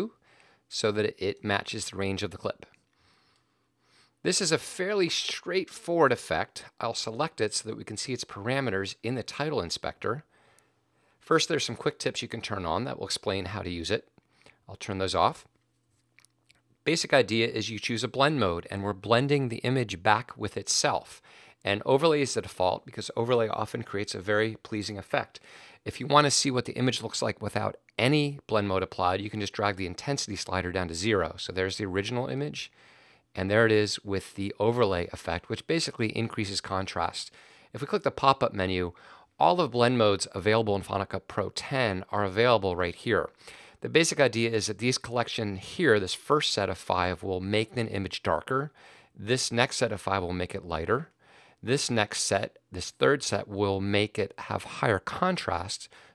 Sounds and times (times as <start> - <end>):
Speech: 0.0 - 2.8, 4.2 - 10.3, 11.2 - 14.1, 14.7 - 15.5, 16.8 - 32.8, 33.4 - 55.9.